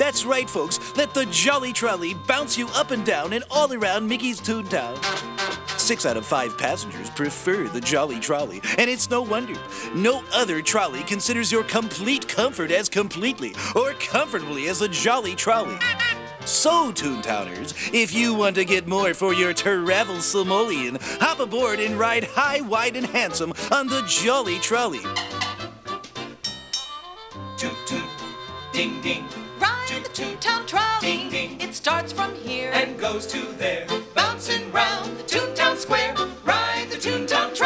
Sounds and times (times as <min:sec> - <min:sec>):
Speech: 0:00.0 - 0:05.0, 0:05.8 - 0:15.8, 0:16.5 - 0:25.1
Music: 0:00.0 - 0:37.6.